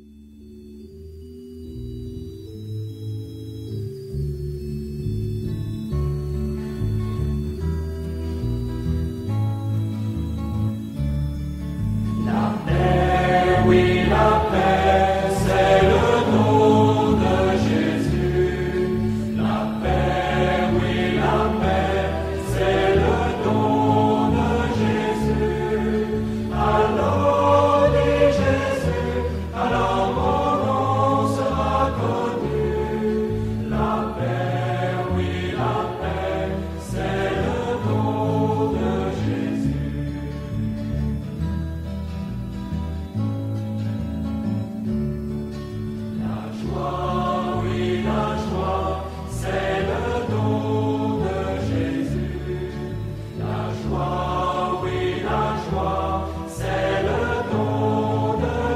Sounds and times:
Mantra: 0:12.3 - 0:39.9, 0:46.2 - 0:58.7.

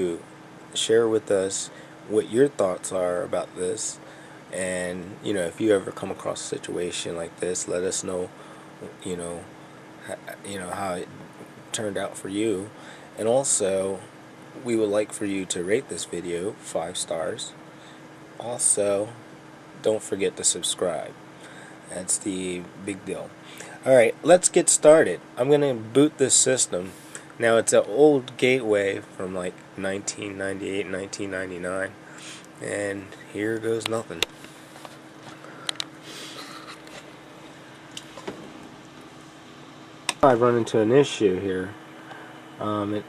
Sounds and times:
Speech: 0:00.0 - 0:04.0, 0:04.6 - 0:17.6, 0:18.4 - 0:19.2, 0:19.8 - 0:21.2, 0:21.9 - 0:34.3, 0:40.1 - 0:41.8, 0:42.6 - 0:43.0.

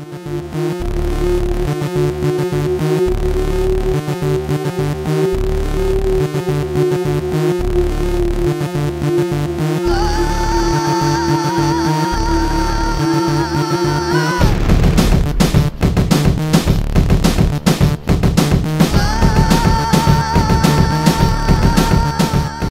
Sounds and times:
Music: 0:00.0 - 0:22.7.

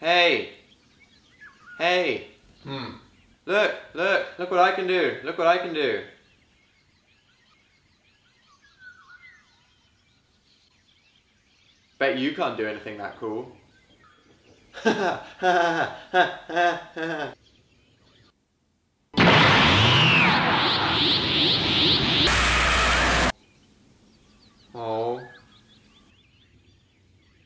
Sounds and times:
Chirp, tweet: 0:00.4 - 0:03.5, 0:05.6 - 0:15.3, 0:17.4 - 0:18.4, 0:23.4 - 0:27.4.

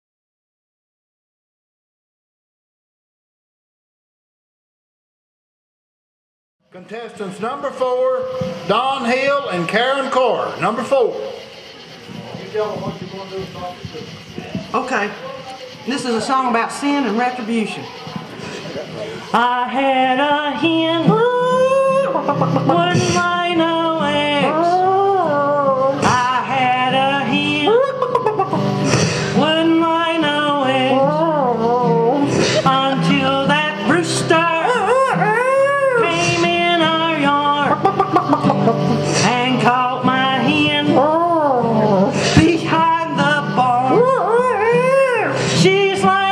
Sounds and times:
Music: 0:19.3 - 0:46.3.

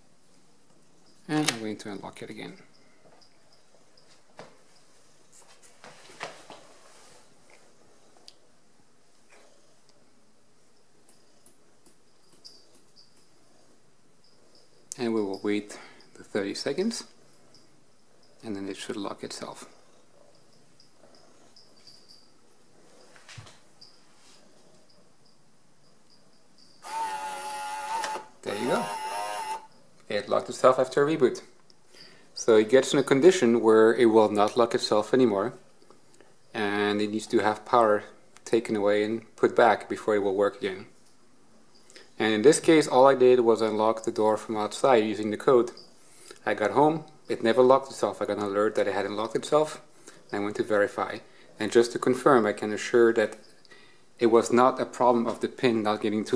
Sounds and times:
Speech: 0:01.3 - 0:02.7, 0:15.0 - 0:17.1, 0:18.4 - 0:19.7, 0:28.4 - 0:28.9, 0:30.1 - 0:31.5, 0:32.4 - 0:35.6, 0:36.6 - 0:40.9, 0:42.2 - 0:45.8, 0:46.4 - 0:53.4, 0:54.2 - 0:56.3.

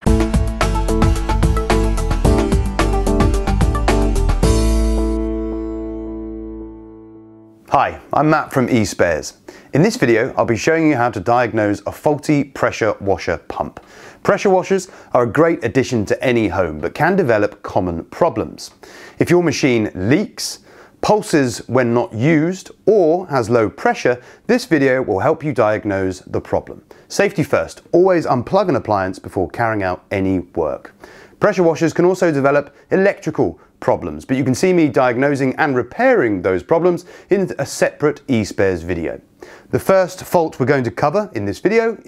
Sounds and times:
Speech: 0:07.7 - 0:42.0.

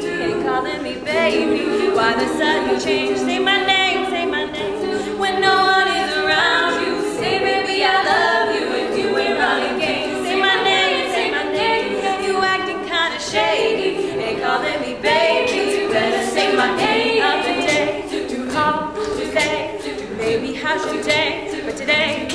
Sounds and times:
A capella: 0:00.0 - 0:22.3
Singing: 0:00.0 - 0:22.3.

